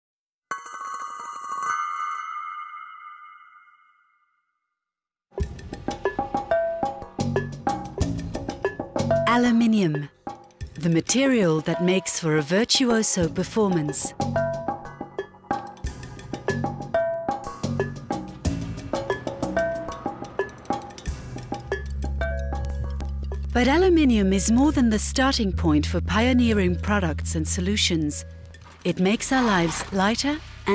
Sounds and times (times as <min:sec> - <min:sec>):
Glockenspiel: 0:00.5 - 0:04.5
Marimba, xylophone: 0:09.0 - 0:10.1, 0:14.2 - 0:23.5.